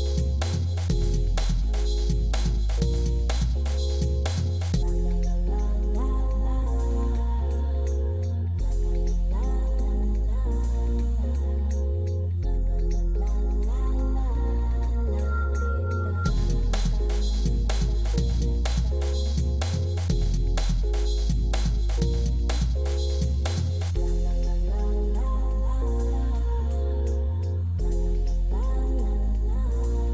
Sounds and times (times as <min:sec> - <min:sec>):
Music: 0:00.0 - 0:30.1.